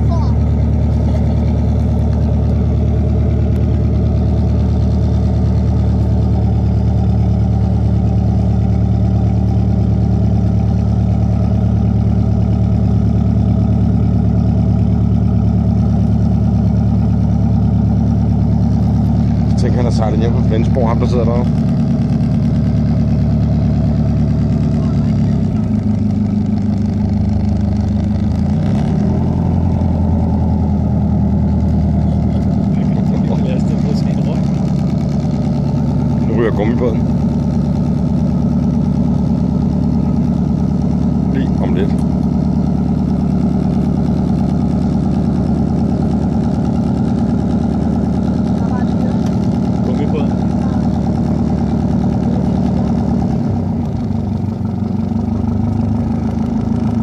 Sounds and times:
Motorboat, speedboat: 0:00.0 - 0:57.0.

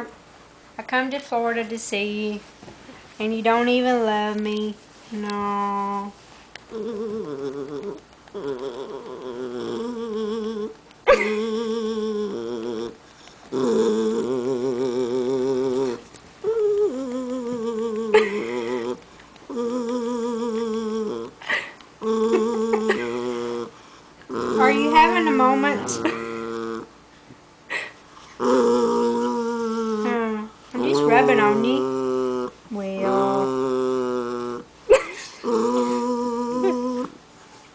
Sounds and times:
Speech: 0:00.8 - 0:02.4, 0:24.6 - 0:26.0, 0:30.0 - 0:31.9, 0:32.7 - 0:33.6.

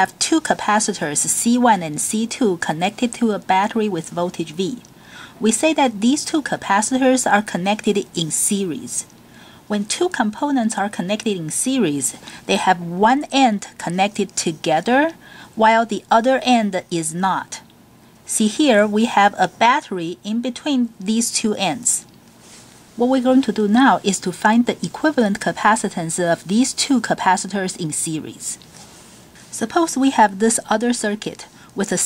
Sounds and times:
Speech: 0:00.0 - 0:09.1, 0:09.7 - 0:17.7, 0:18.3 - 0:22.1, 0:23.0 - 0:28.6, 0:29.5 - 0:32.0.

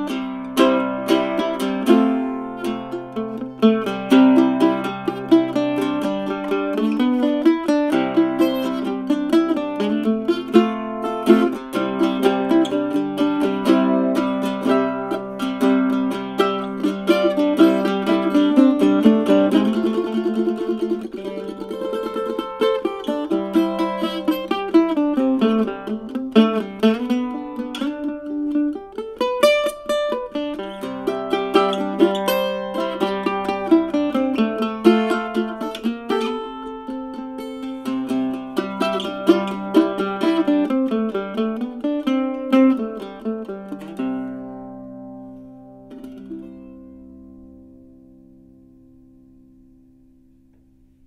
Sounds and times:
Bluegrass: 0:00.0 - 0:51.0
Mandolin: 0:00.0 - 0:51.0.

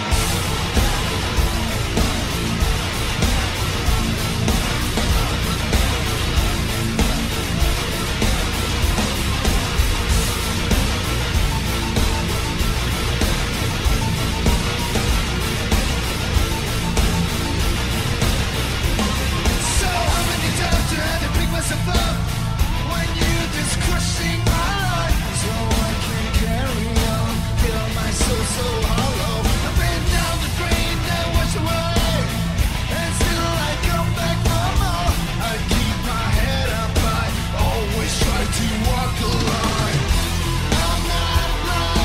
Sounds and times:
Music: 0:00.0 - 0:42.0.

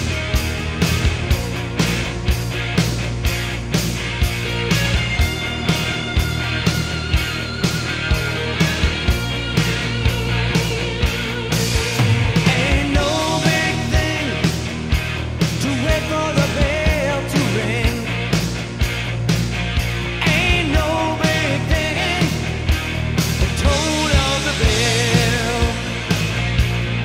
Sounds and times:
Heavy metal: 0:00.0 - 0:27.0
Rock and roll: 0:00.0 - 0:27.0.

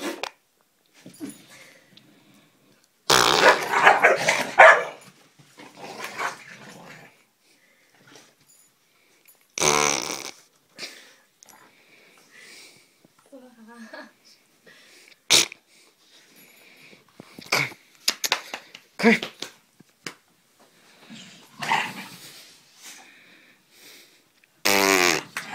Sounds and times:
Fart: 0:03.1 - 0:03.8, 0:09.6 - 0:10.5, 0:15.3 - 0:15.6, 0:24.6 - 0:25.5.

